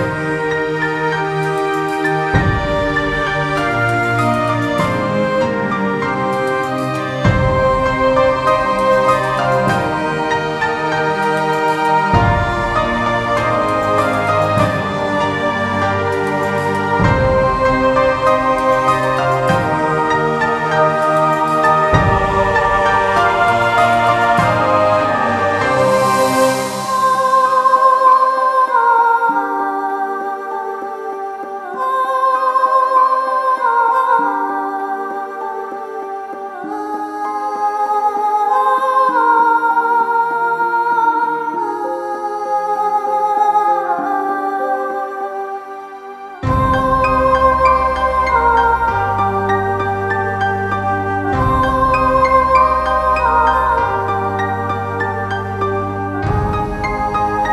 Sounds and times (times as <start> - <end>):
New-age music: 0.0 - 57.5.